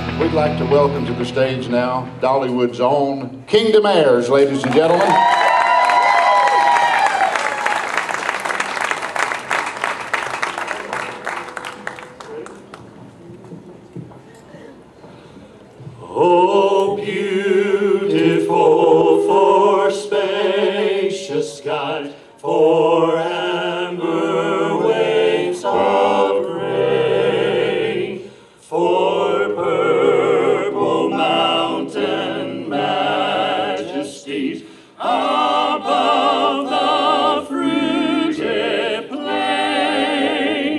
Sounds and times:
Choir: 15.9 - 40.7.

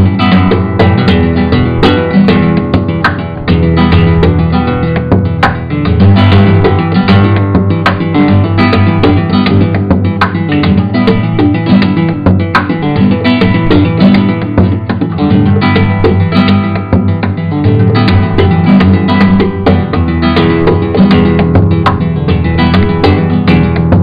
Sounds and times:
Guitar: 0.0 - 24.0.

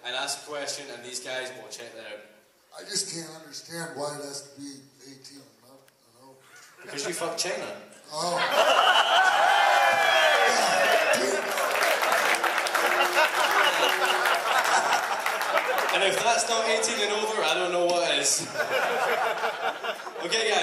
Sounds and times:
Speech: 0.0 - 8.5, 15.9 - 18.5, 20.2 - 20.6
Laughter: 8.2 - 9.8, 12.5 - 16.0, 18.4 - 20.4.

